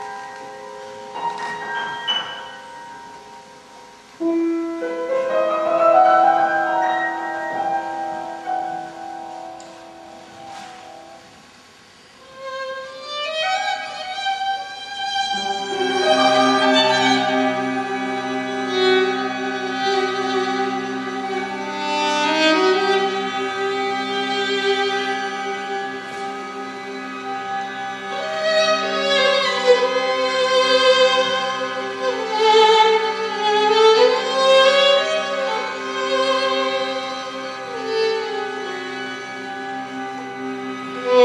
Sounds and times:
Violin, fiddle: 12.1 - 41.2.

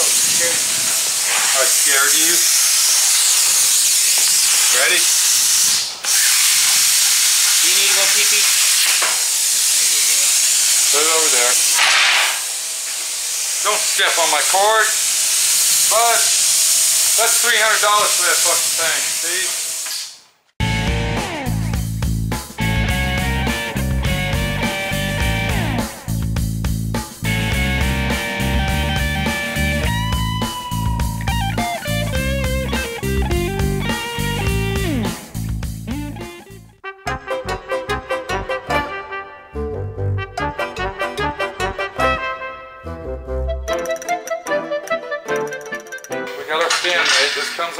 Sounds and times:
Speech: 0.0 - 0.7, 1.5 - 2.5, 4.7 - 5.1, 7.6 - 8.6, 10.9 - 11.6, 13.6 - 15.0, 15.9 - 16.4, 17.2 - 19.6, 46.4 - 47.7
Music: 20.6 - 47.7.

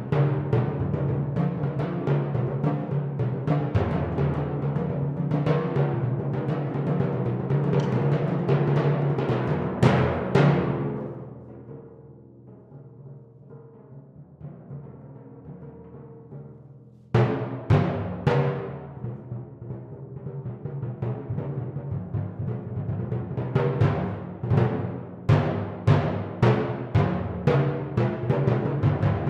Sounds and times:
Timpani: 0.0 - 29.3.

